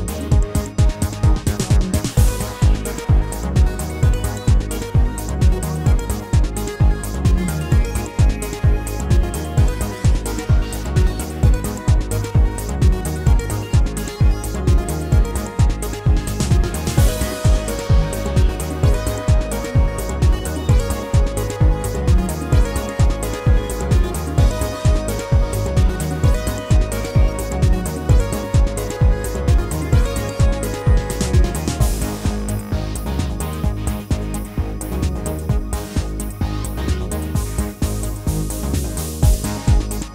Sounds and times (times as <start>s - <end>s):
Music: 0.0s - 40.1s.